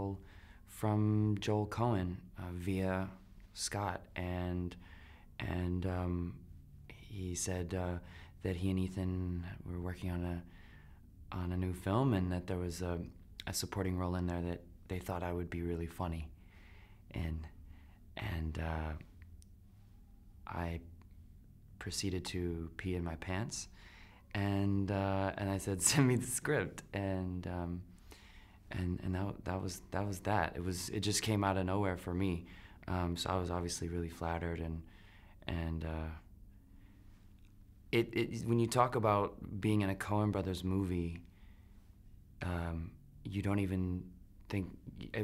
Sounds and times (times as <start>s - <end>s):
Speech: 0.0s - 4.8s, 5.4s - 10.5s, 11.3s - 16.3s, 17.1s - 17.6s, 18.2s - 19.1s, 20.4s - 20.9s, 21.8s - 23.7s, 24.3s - 27.9s, 28.7s - 36.3s, 37.9s - 41.3s, 42.4s - 45.2s.